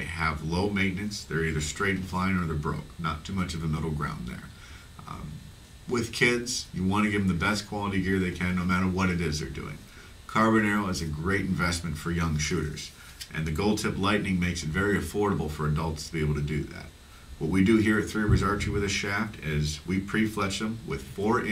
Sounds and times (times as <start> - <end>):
Speech: 0.0 - 21.5.